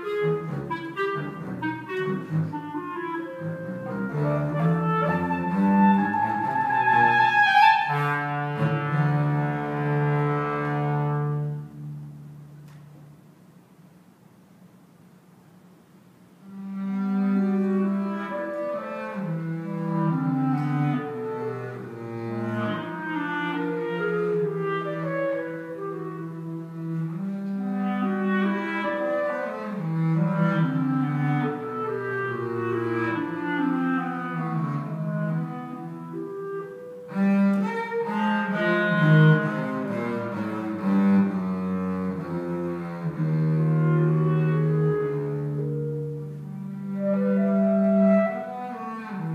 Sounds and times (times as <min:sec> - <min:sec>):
Clarinet: 0:00.0 - 0:12.9, 0:16.4 - 0:49.3.